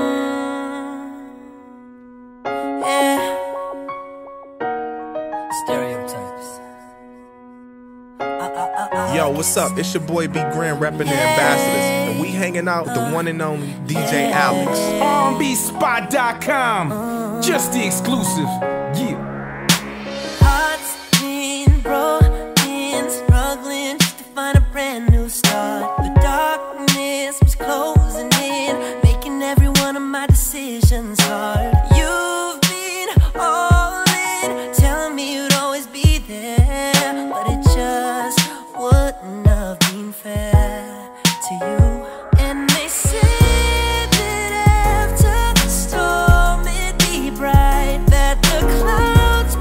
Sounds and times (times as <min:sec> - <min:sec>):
Music: 0:00.0 - 0:49.6.